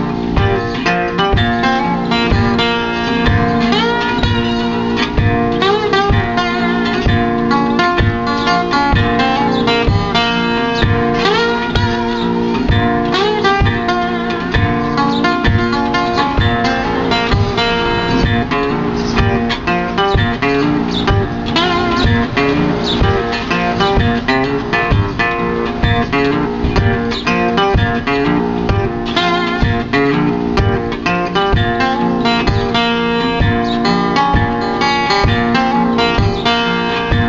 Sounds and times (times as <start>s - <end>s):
Acoustic guitar: 0.0s - 37.2s
Strum: 0.0s - 37.2s.